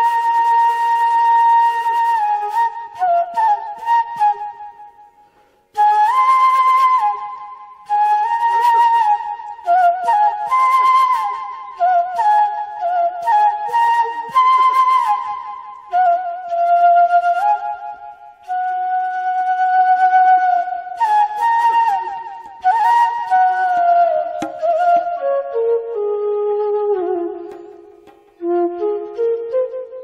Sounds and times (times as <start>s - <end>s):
Flute: 0.0s - 30.0s.